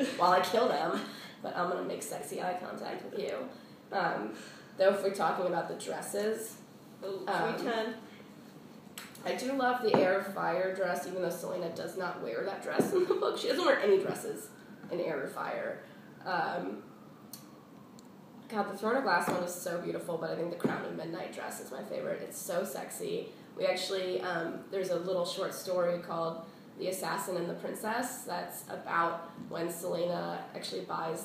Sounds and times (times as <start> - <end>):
Speech: 0.0 - 8.0, 9.2 - 16.8.